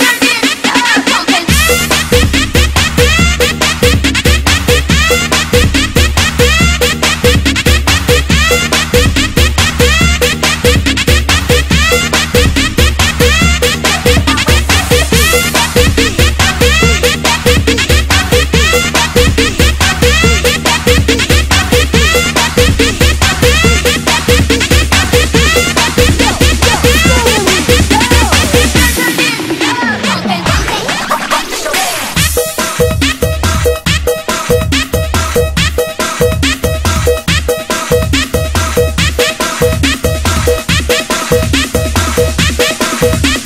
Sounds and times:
House music: 0:00.0 - 0:43.4.

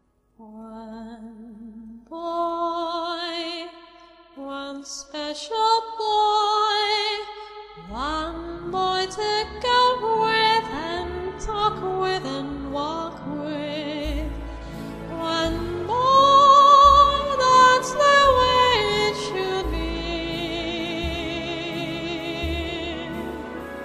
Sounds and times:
Music: 0:00.0 - 0:23.8
Female singing: 0:00.4 - 0:03.8, 0:04.4 - 0:14.3, 0:15.2 - 0:23.3.

